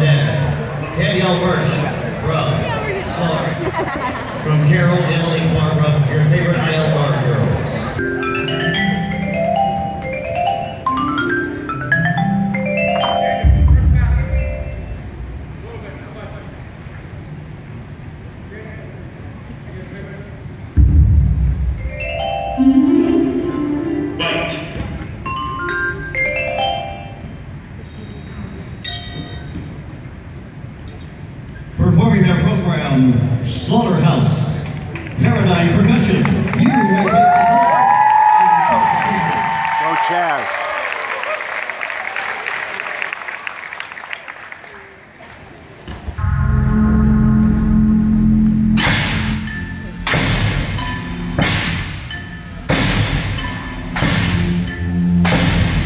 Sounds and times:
Tubular bells: 8.0 - 16.0, 20.8 - 30.0, 46.2 - 55.8.

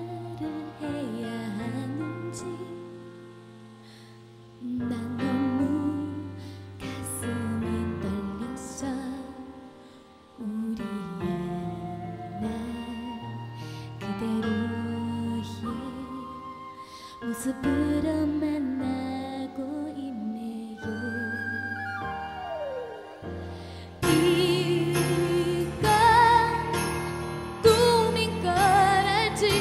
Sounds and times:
Music: 0.0 - 29.6.

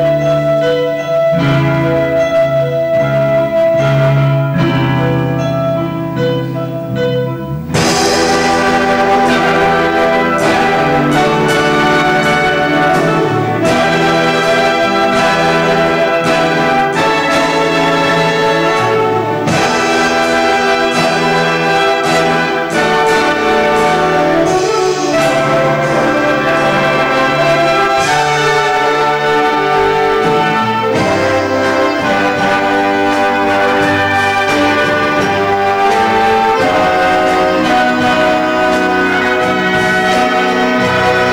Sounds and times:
Orchestra: 0.0 - 41.3
Trombone: 0.0 - 41.3
Trumpet: 0.0 - 41.3.

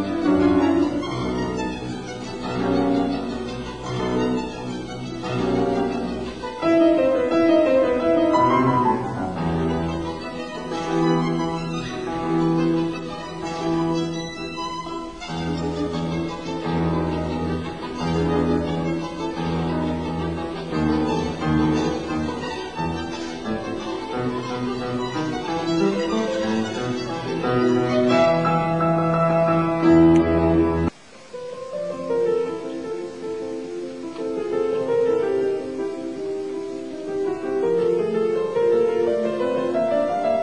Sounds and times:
Violin, fiddle: 0.0 - 30.9.

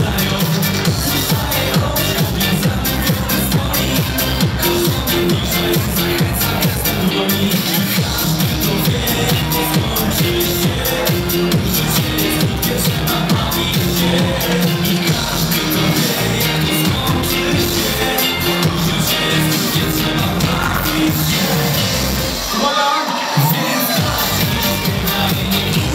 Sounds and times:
Music: 0.0 - 25.9.

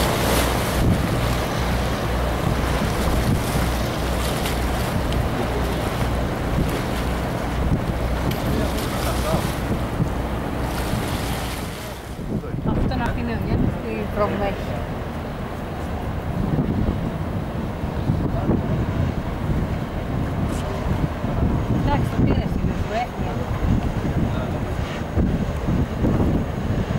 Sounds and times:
Boat, Water vehicle: 0.0 - 26.9.

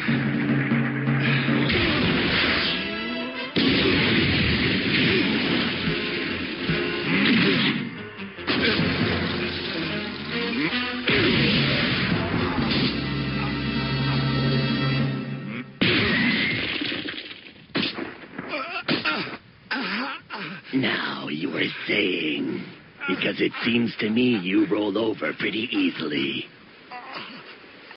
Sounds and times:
Speech: 20.7 - 26.5.

